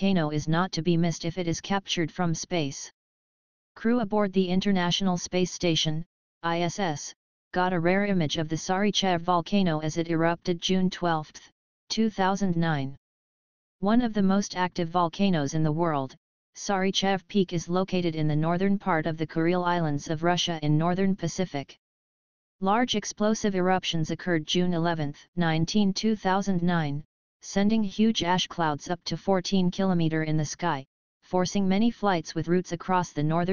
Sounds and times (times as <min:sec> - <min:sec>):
Speech: 0:00.0 - 0:02.9, 0:03.8 - 0:13.0, 0:13.8 - 0:21.8, 0:22.6 - 0:33.5.